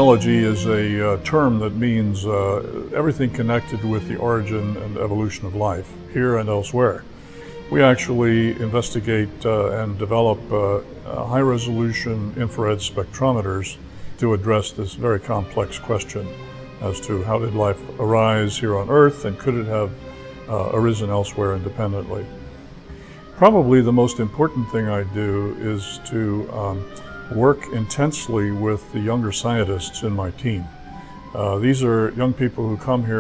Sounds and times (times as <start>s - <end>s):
Speech: 0.0s - 7.0s, 7.7s - 22.3s, 23.4s - 30.7s, 31.4s - 33.2s
Music: 0.0s - 33.2s.